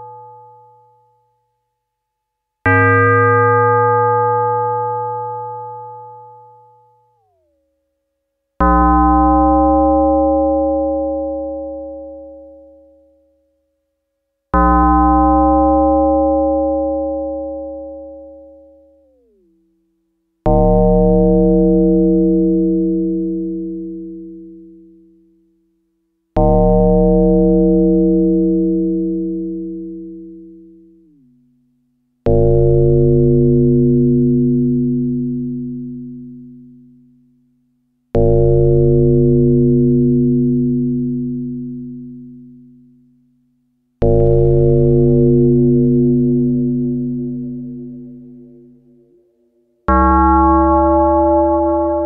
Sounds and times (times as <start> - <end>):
Synthesizer: 8.6 - 13.2, 14.5 - 19.5, 38.2 - 42.6, 44.0 - 52.0.